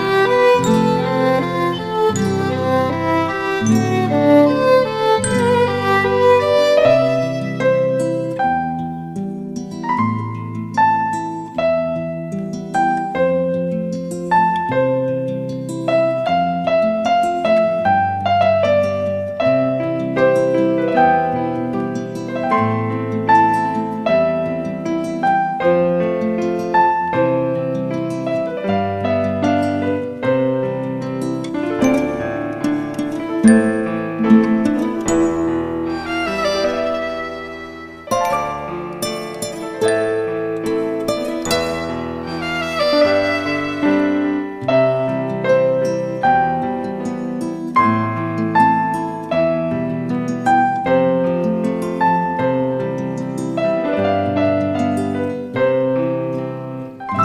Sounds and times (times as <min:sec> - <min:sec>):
Music: 0:00.0 - 0:57.2.